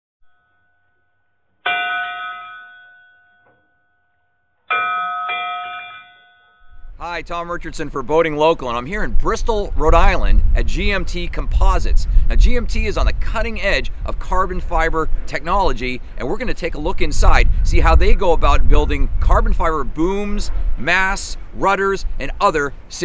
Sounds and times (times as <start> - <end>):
Speech: 7.0 - 23.0.